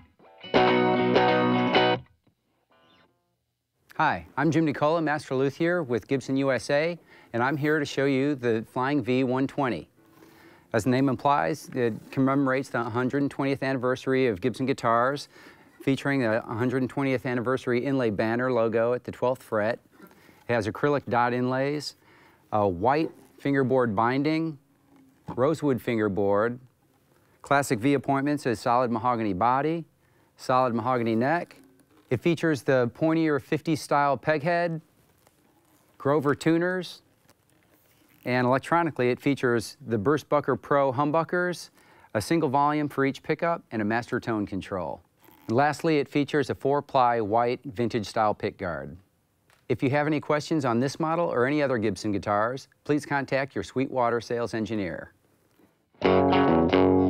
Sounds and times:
Speech: 3.9 - 9.9, 10.7 - 19.8, 20.5 - 24.6, 25.3 - 26.7, 27.4 - 34.9, 36.0 - 37.1, 38.2 - 49.1, 49.7 - 55.2.

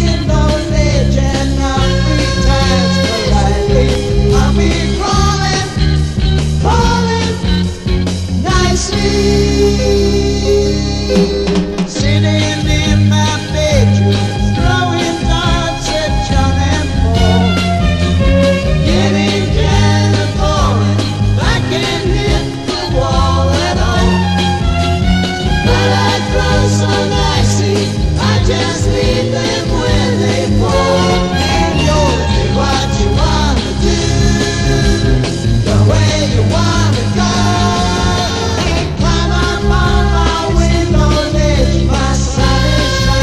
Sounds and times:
Music: 0.0 - 43.2.

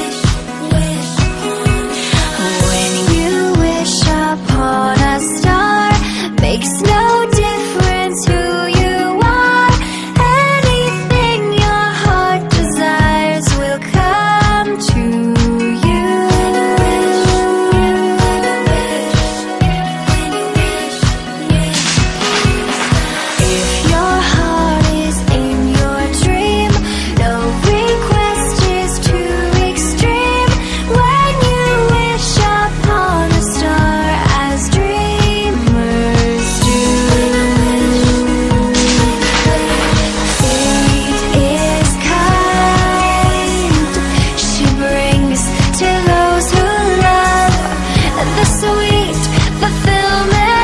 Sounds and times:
Tender music: 0.0 - 50.6.

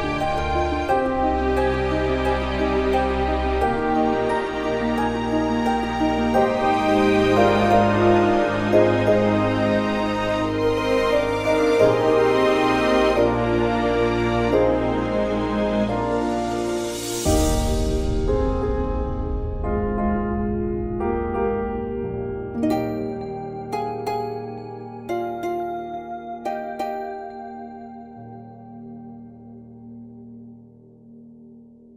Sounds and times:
Background music: 0.0 - 31.9
Soundtrack music: 0.0 - 31.9.

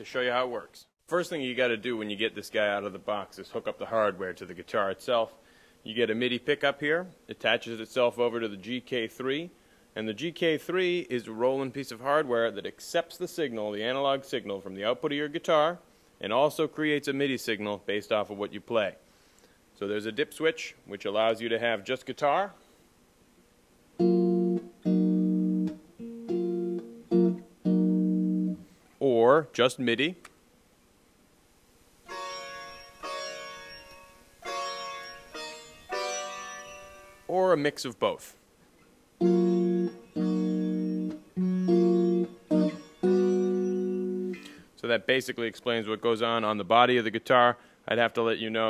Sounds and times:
Speech: 0.0 - 19.0, 19.8 - 22.6, 29.0 - 30.2, 37.3 - 38.4, 44.8 - 48.6.

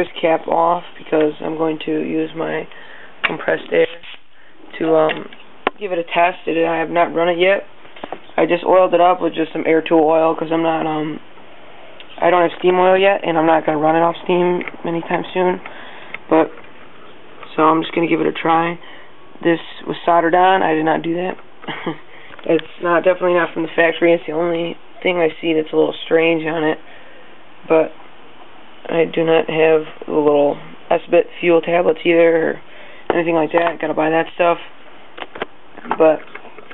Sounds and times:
Speech: 0.0 - 4.1, 4.7 - 7.7, 8.4 - 11.2, 12.1 - 15.7, 16.3 - 16.6, 17.4 - 18.8, 19.4 - 21.4, 22.4 - 26.8, 27.7 - 28.0, 28.9 - 34.7, 35.8 - 36.4.

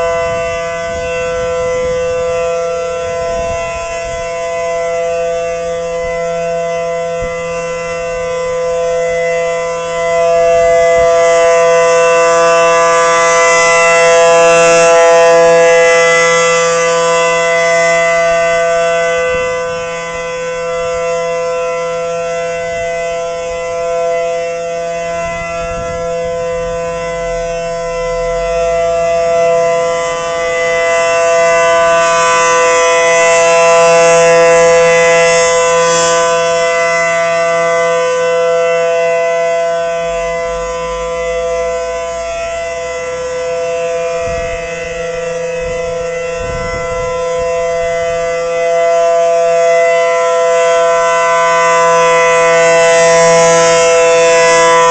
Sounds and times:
Civil defense siren: 0.0 - 54.9.

